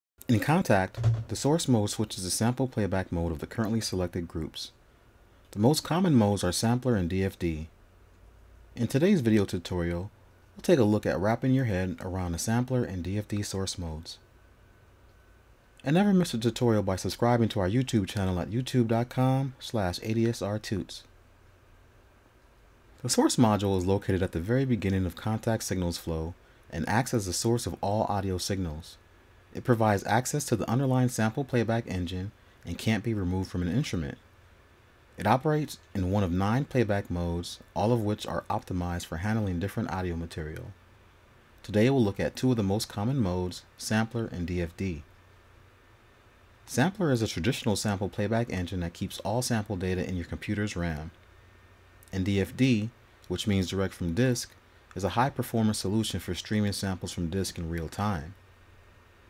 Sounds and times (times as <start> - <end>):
Speech: 0.2 - 4.8, 5.5 - 7.8, 8.8 - 14.2, 15.8 - 21.1, 23.0 - 34.2, 35.2 - 40.8, 41.6 - 45.1, 46.7 - 51.2, 52.0 - 58.4.